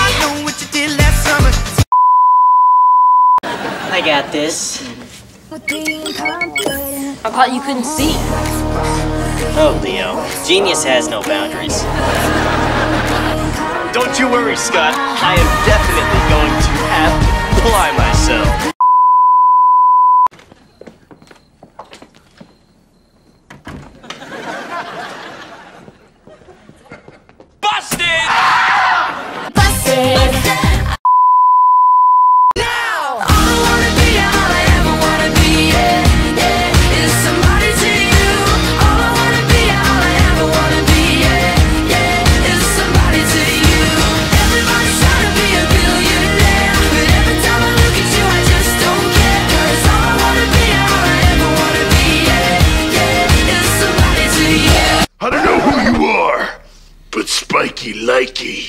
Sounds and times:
Music: 0.0 - 1.9, 7.8 - 18.8, 29.6 - 31.0, 33.2 - 55.1.

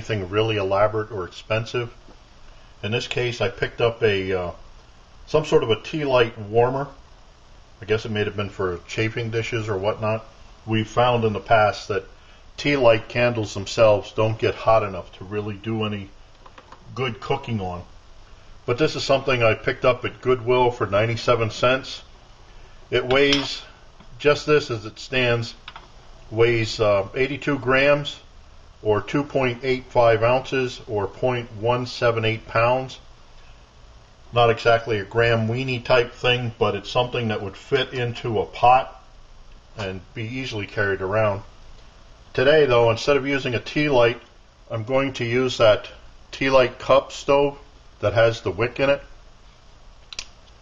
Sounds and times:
Speech: 0.0 - 2.0, 2.8 - 4.6, 5.3 - 7.0, 7.8 - 16.2, 16.8 - 17.9, 18.7 - 22.1, 22.9 - 25.6, 26.3 - 33.0, 34.3 - 39.1, 39.8 - 41.5, 42.3 - 49.1
Boiling: 0.0 - 50.6.

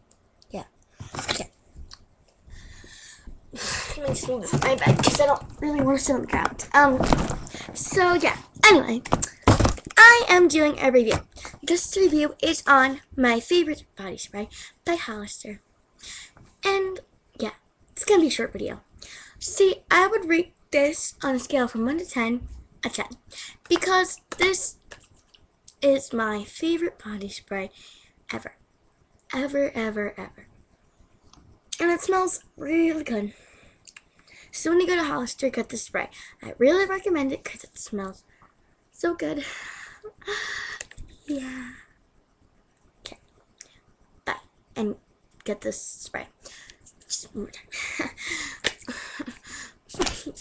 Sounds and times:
Speech: 3.9 - 7.1, 7.8 - 9.0, 10.0 - 15.6, 16.6 - 24.8, 25.7 - 28.6, 29.3 - 30.4, 31.8 - 33.4, 34.5 - 38.2, 39.0 - 39.5, 44.3 - 46.4, 47.1 - 47.7.

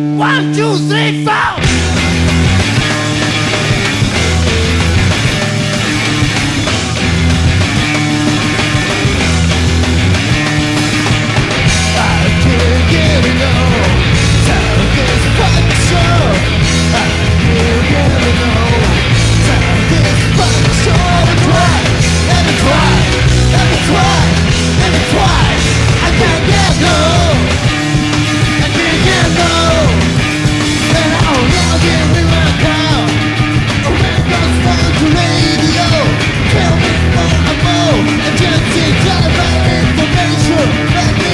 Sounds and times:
Guitar: 0.0 - 41.3.

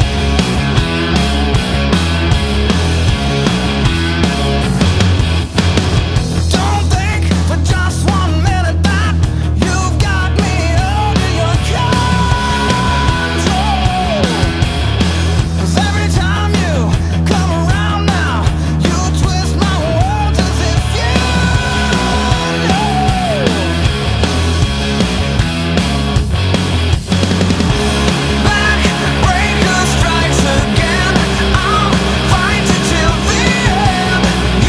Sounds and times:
Progressive rock: 0.0 - 34.6.

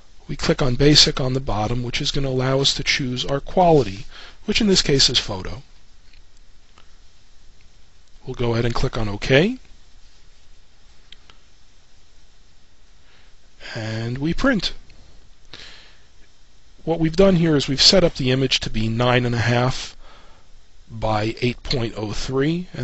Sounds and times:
Speech: 0.3 - 5.7, 8.2 - 9.7, 13.6 - 14.8, 16.8 - 20.0, 20.9 - 22.8.

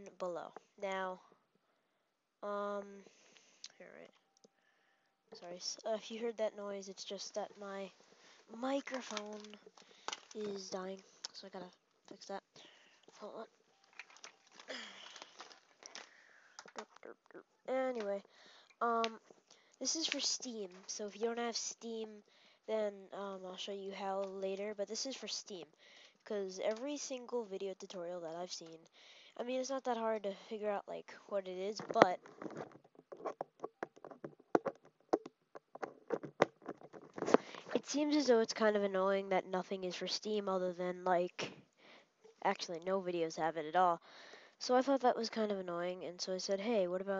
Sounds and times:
Speech: 0.0 - 1.2, 2.4 - 3.1, 3.7 - 4.1, 5.4 - 7.9, 8.5 - 9.6, 10.3 - 12.5, 13.1 - 13.5, 16.8 - 19.2, 19.8 - 32.2, 37.7 - 41.5, 42.4 - 44.0, 44.6 - 47.1.

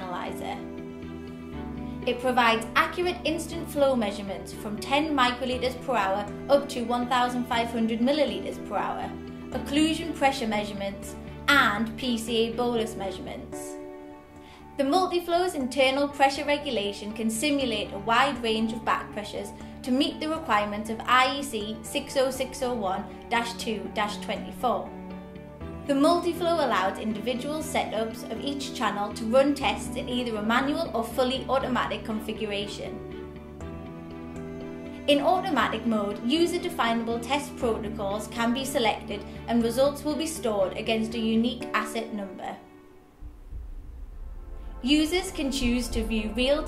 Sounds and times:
Speech: 0.0 - 0.6, 2.1 - 13.8, 14.8 - 24.9, 25.9 - 33.0, 35.1 - 42.6, 44.8 - 46.6
Music: 0.0 - 46.6.

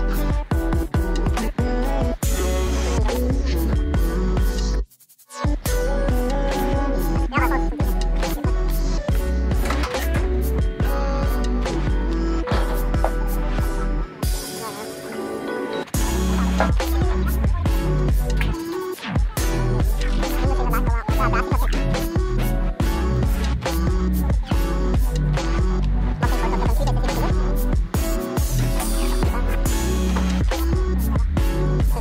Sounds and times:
Music: 0.0 - 32.0.

